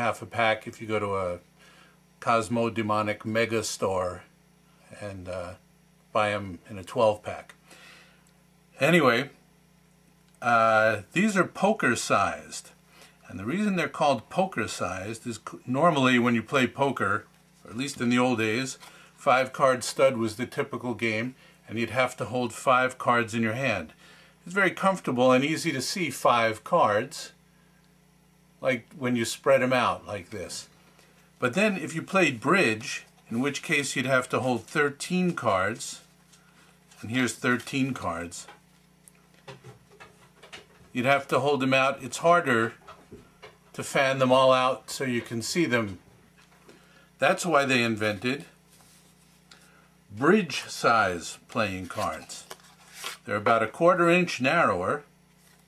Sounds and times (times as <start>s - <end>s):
Speech: 0.0s - 1.4s, 2.2s - 4.3s, 4.9s - 7.6s, 8.8s - 9.4s, 10.4s - 27.4s, 28.6s - 30.7s, 31.4s - 36.1s, 37.0s - 38.6s, 40.9s - 42.8s, 43.7s - 46.0s, 47.2s - 48.6s, 50.1s - 52.6s, 53.2s - 55.1s.